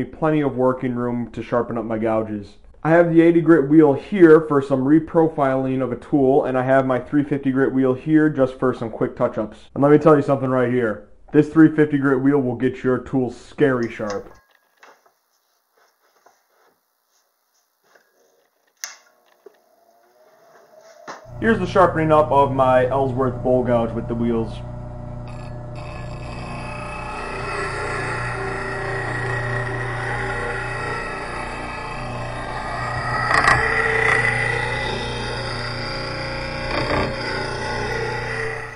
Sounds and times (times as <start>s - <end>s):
Speech: 0.0s - 14.3s, 21.4s - 24.7s.